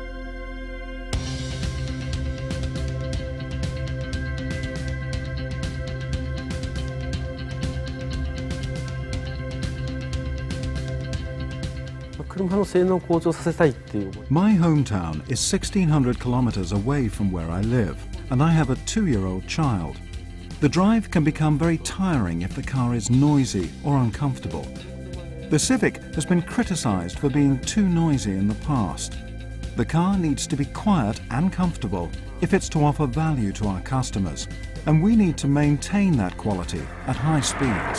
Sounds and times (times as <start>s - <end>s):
Music: 0.0s - 37.9s
Speech: 12.2s - 20.0s, 20.6s - 29.2s, 29.8s - 37.9s.